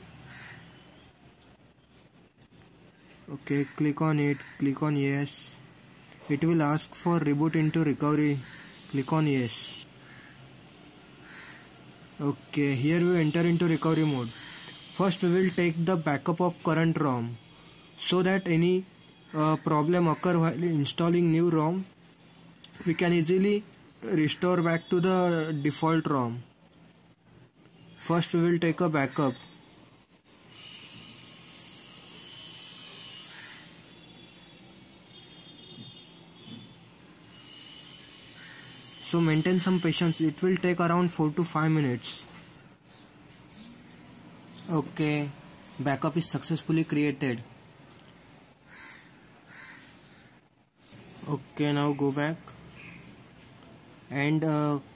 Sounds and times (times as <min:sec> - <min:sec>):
Speech: 0:03.3 - 0:05.6, 0:06.3 - 0:09.8, 0:12.2 - 0:14.4, 0:15.0 - 0:17.4, 0:18.0 - 0:22.0, 0:22.8 - 0:26.5, 0:28.0 - 0:29.5, 0:39.0 - 0:42.3, 0:44.6 - 0:47.5, 0:51.2 - 0:52.6, 0:54.1 - 0:54.9.